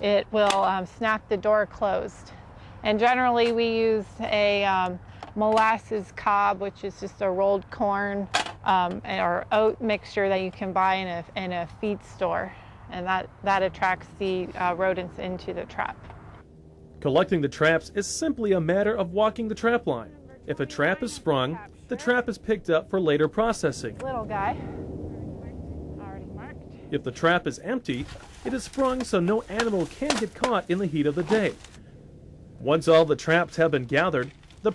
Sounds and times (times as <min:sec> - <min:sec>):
Speech: 0:00.0 - 0:02.1, 0:02.9 - 0:16.0, 0:17.0 - 0:24.6, 0:26.0 - 0:31.6, 0:32.6 - 0:34.7.